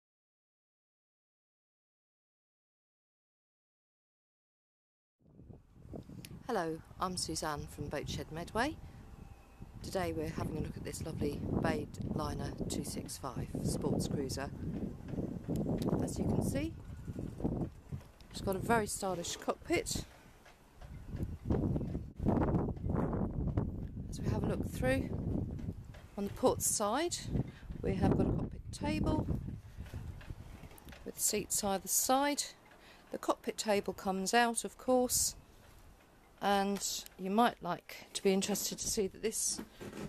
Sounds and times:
Speech: 6.5s - 8.8s, 9.8s - 14.5s, 15.9s - 16.8s, 18.3s - 20.1s, 24.1s - 25.1s, 26.2s - 29.3s, 31.1s - 35.4s, 36.4s - 39.7s.

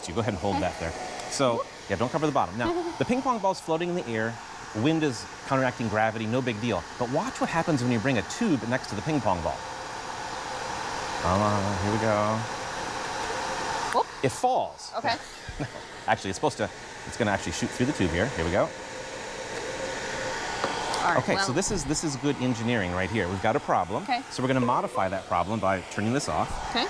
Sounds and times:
Speech: 0.0s - 9.6s, 11.2s - 12.4s, 16.1s - 18.7s, 21.0s - 26.8s.

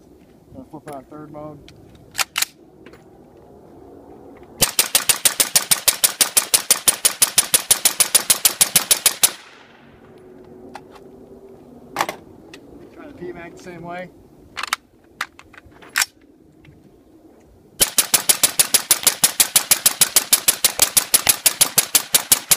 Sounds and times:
Speech: 0.6s - 1.6s, 13.0s - 14.1s
Machine gun: 4.6s - 9.5s, 17.8s - 22.5s.

